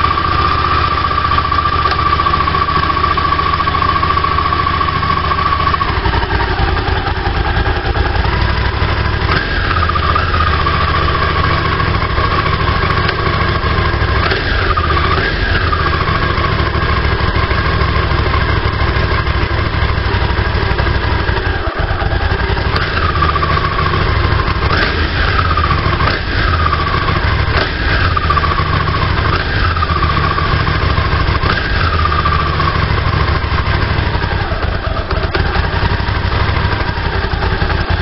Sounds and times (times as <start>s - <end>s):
Vehicle: 0.0s - 38.0s.